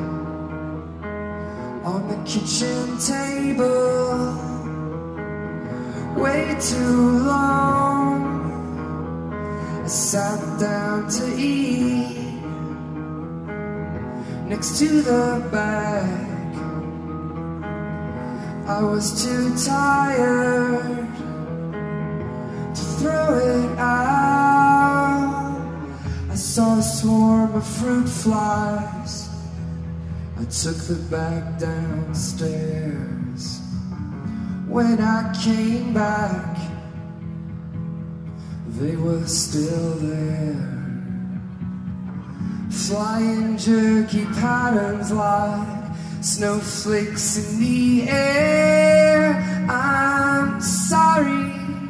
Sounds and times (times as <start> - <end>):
Music: 0.0 - 51.8.